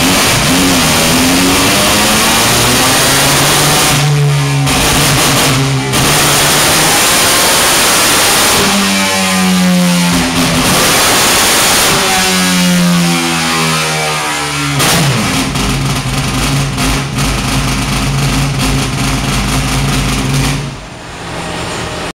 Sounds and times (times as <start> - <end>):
Accelerating, revving, vroom: 0.0 - 15.4
Car: 0.0 - 22.1
Medium engine (mid frequency): 0.0 - 22.1.